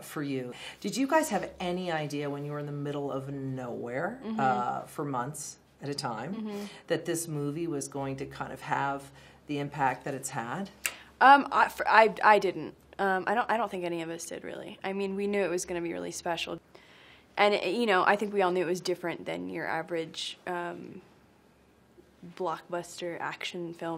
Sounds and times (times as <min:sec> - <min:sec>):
Inside, small room: 0:00.0 - 0:23.9
Speech: 0:01.0 - 0:06.5.